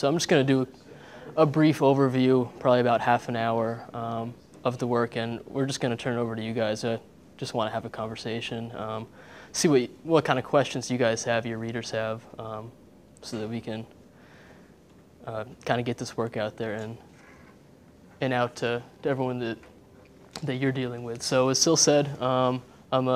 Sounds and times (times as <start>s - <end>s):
Speech: 0.0s - 14.0s, 15.2s - 17.1s, 18.2s - 19.7s, 20.4s - 23.1s.